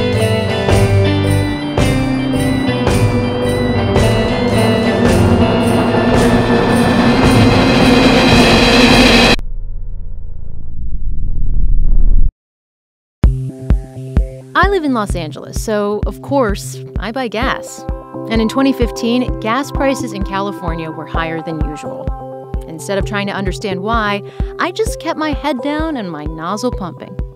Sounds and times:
Music: 0.0 - 9.4, 13.2 - 27.3
Speech: 14.6 - 22.0, 22.6 - 27.2.

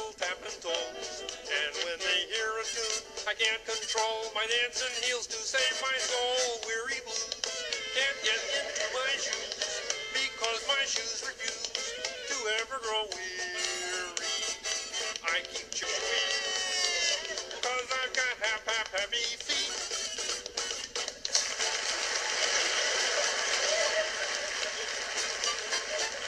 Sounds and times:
Music: 0.0 - 26.2.

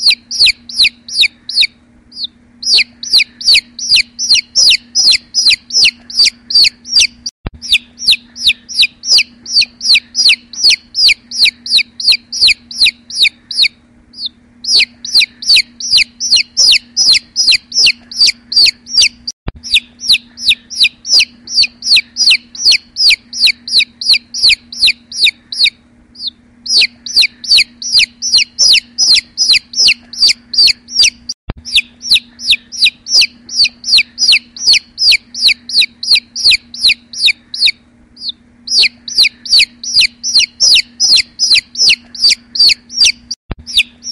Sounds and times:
Chicken, rooster: 0.0 - 44.1.

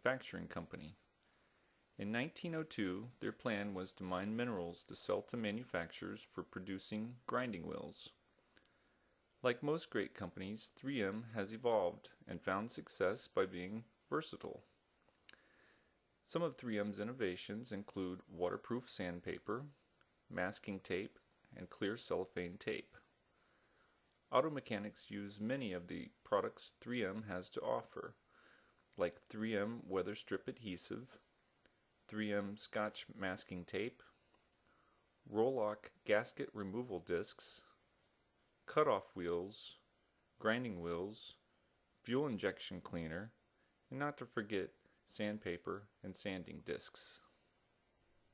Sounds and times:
Speech: 0.0 - 1.1, 2.0 - 8.2, 9.4 - 14.8, 16.2 - 23.1, 24.3 - 28.2, 29.0 - 31.3, 32.1 - 34.2, 35.2 - 37.8, 38.7 - 47.4.

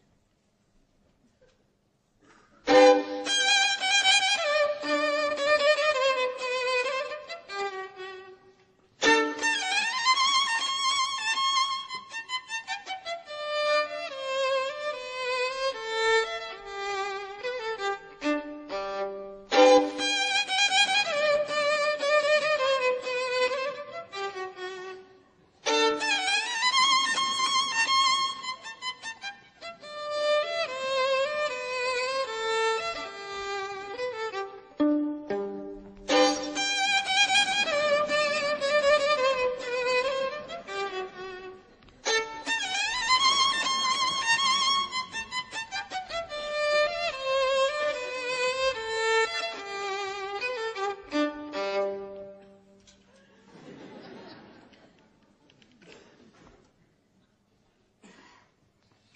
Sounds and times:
Violin, fiddle: 2.6 - 53.0.

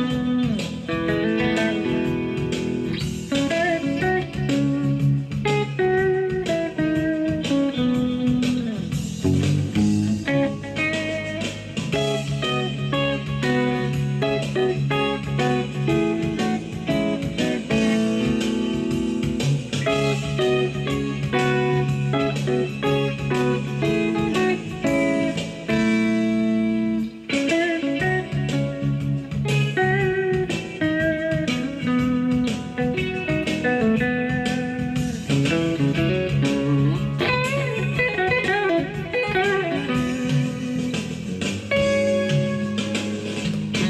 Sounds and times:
Guitar: 0.0 - 43.9
Inside, small room: 0.0 - 43.9.

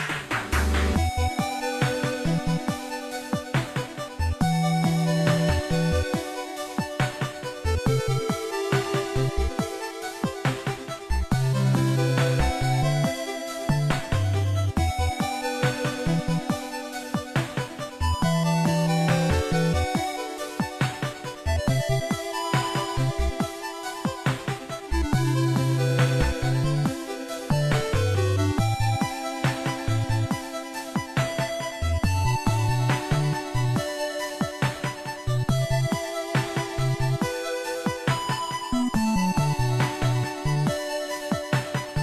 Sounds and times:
Music: 0.0 - 42.0.

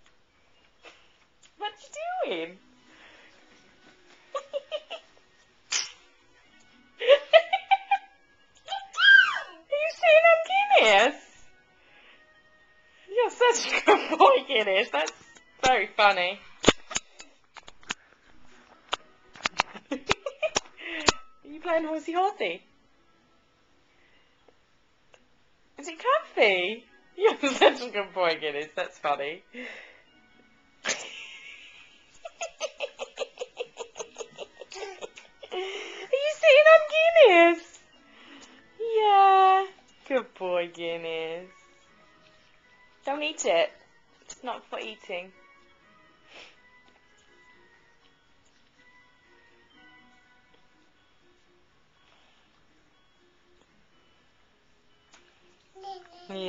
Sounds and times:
Music: 0.0 - 56.4.

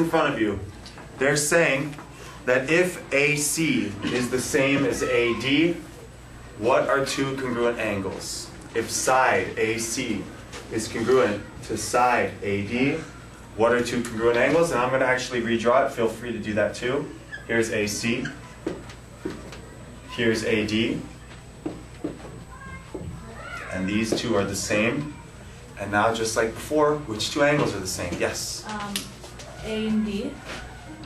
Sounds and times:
Male speech, man speaking: 0.0 - 5.9, 6.6 - 18.4, 20.1 - 21.2, 23.7 - 25.2, 25.8 - 28.7.

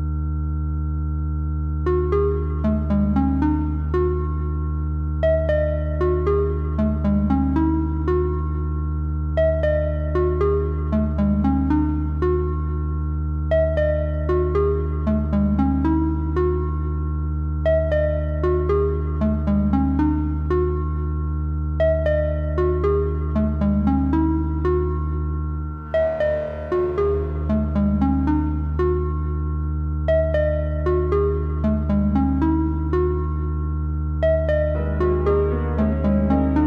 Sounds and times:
Music: 0.0 - 36.6.

